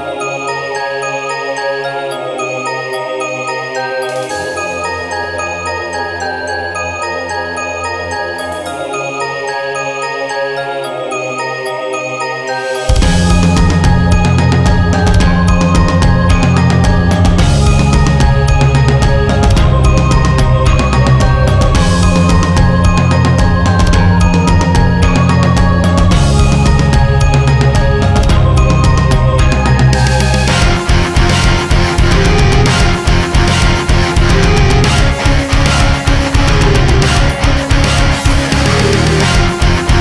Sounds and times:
Music: 0:00.0 - 0:40.0.

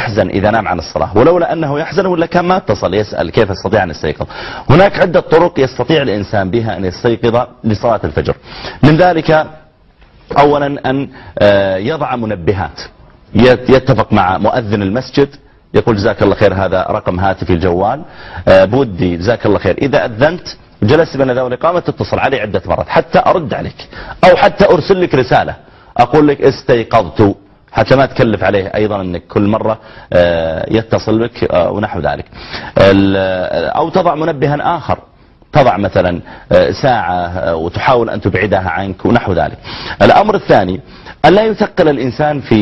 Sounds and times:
Speech: 0:00.0 - 0:09.6, 0:10.3 - 0:42.6.

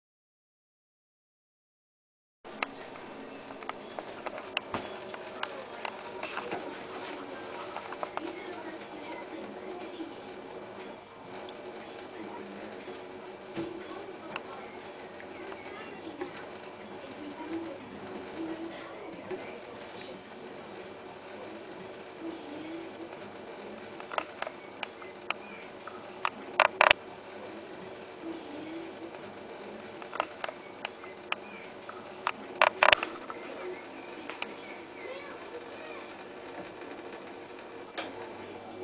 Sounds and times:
Speech: 0:02.5 - 0:24.0, 0:25.1 - 0:30.3, 0:31.1 - 0:36.3, 0:37.9 - 0:38.8.

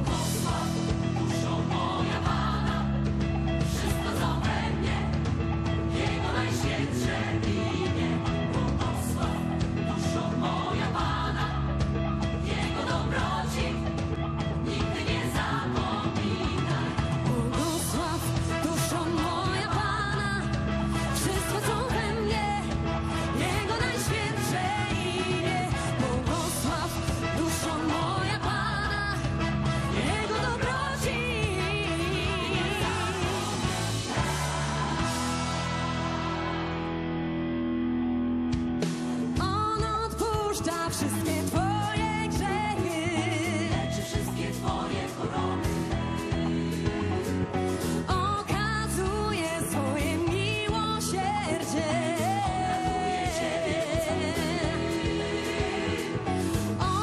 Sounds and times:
Music: 0:00.0 - 0:57.0.

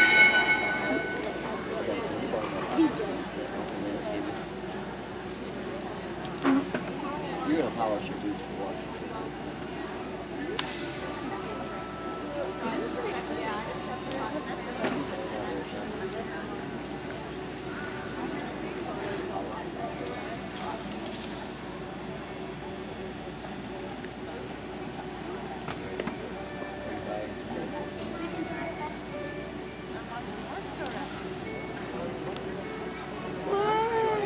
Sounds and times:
Speech: 0:00.0 - 0:34.2
Music: 0:26.6 - 0:30.9.

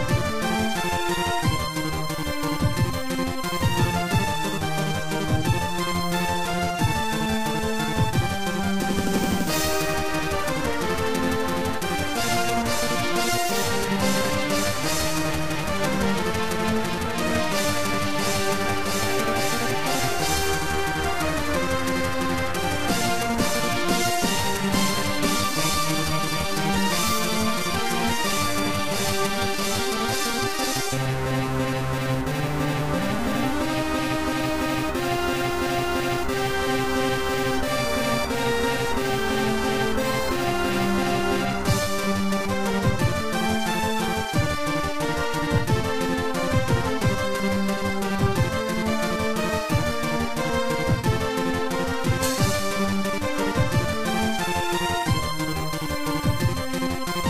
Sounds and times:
Music: 0:00.0 - 0:57.3.

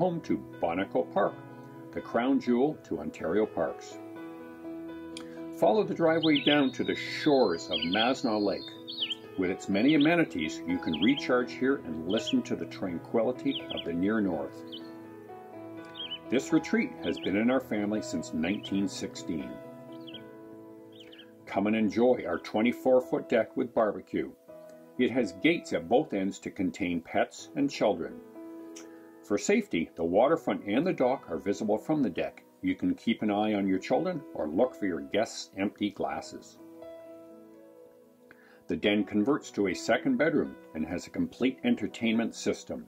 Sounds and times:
Speech: 0:00.0 - 0:04.0, 0:05.6 - 0:08.8, 0:09.4 - 0:14.6, 0:16.3 - 0:19.6, 0:21.5 - 0:24.4, 0:25.0 - 0:28.2, 0:29.3 - 0:36.6, 0:38.7 - 0:42.8
Music: 0:00.0 - 0:42.8.

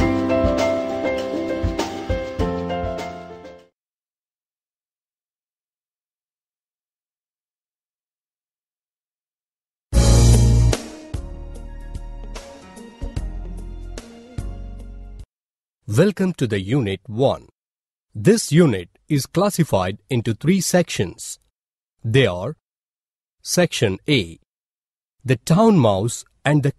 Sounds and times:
Music: 0:00.0 - 0:03.8, 0:10.0 - 0:15.3.

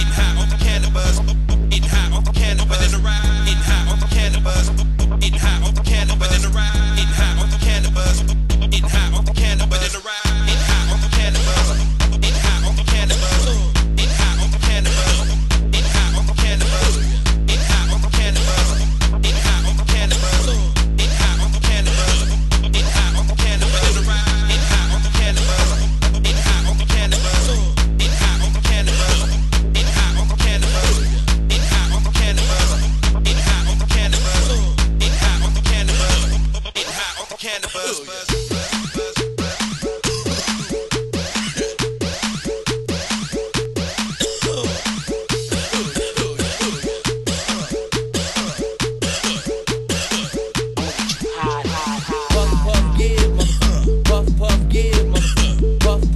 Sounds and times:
Electronic music: 0:00.0 - 0:56.1.

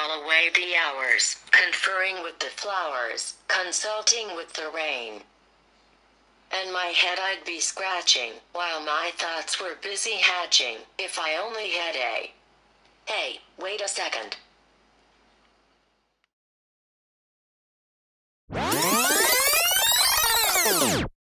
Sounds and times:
Speech: 0:00.0 - 0:05.3, 0:06.5 - 0:12.4, 0:13.1 - 0:14.5.

